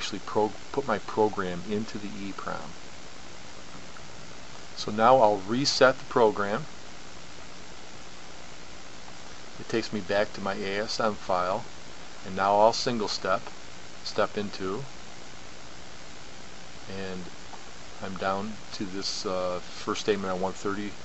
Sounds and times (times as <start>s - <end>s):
Speech: 0.0s - 2.8s, 4.8s - 6.7s, 9.6s - 14.9s, 16.9s - 17.4s, 18.0s - 21.0s.